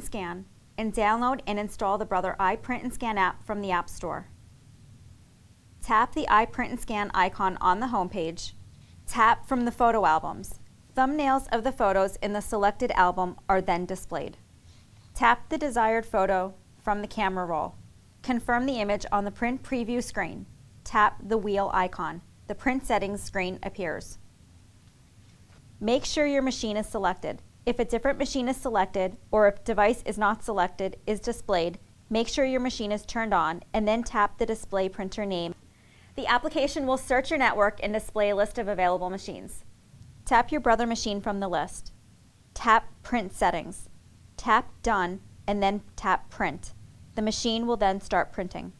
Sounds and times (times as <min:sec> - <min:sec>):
Speech: 0:00.0 - 0:04.3, 0:05.8 - 0:14.4, 0:15.2 - 0:24.2, 0:25.8 - 0:35.6, 0:36.2 - 0:39.7, 0:40.3 - 0:42.0, 0:42.6 - 0:48.7.